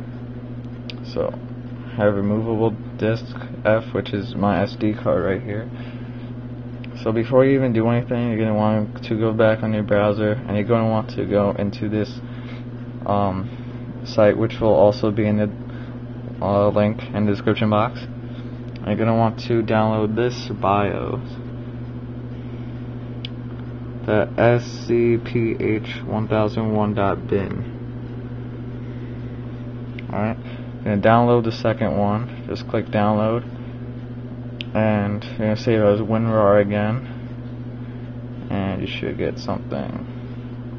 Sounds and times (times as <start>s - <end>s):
Speech: 0.9s - 5.8s, 6.9s - 12.3s, 13.0s - 15.6s, 16.4s - 18.1s, 18.8s - 21.5s, 24.0s - 27.8s, 30.0s - 33.5s, 34.6s - 37.2s, 38.4s - 40.1s.